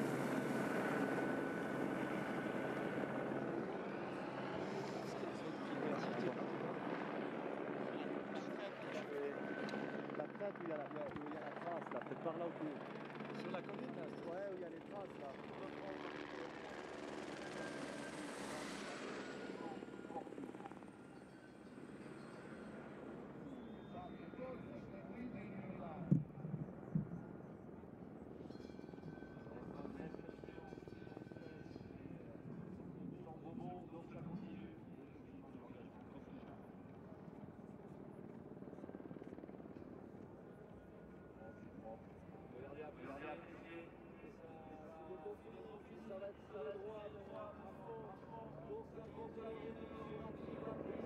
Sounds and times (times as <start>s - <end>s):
Speech: 4.6s - 17.1s, 19.4s - 20.6s, 23.9s - 26.6s, 29.4s - 37.9s, 40.5s - 51.0s.